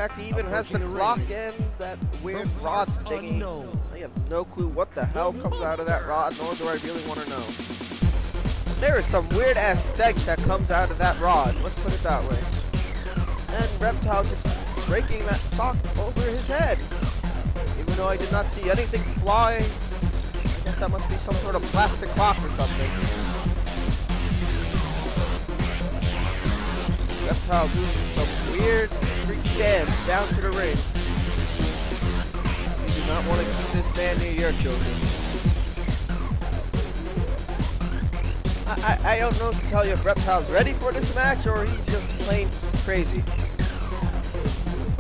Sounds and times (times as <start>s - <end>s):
Speech: 0.0s - 7.5s, 8.8s - 12.5s, 13.5s - 16.8s, 17.8s - 19.7s, 20.7s - 23.2s, 27.3s - 30.8s, 32.9s - 35.0s, 38.7s - 43.2s
Music: 0.0s - 45.0s.